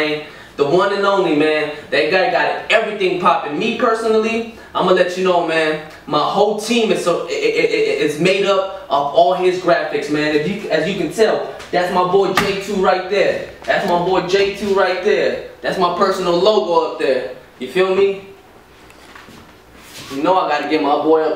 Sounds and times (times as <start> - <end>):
Speech: 0.0 - 18.4, 20.0 - 21.3.